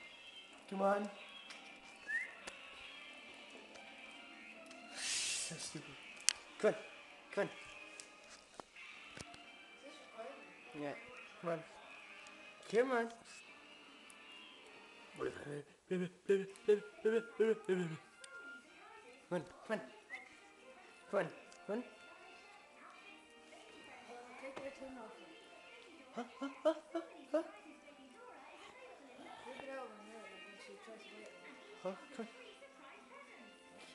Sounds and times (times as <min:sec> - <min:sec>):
Music: 0:00.0 - 0:33.9.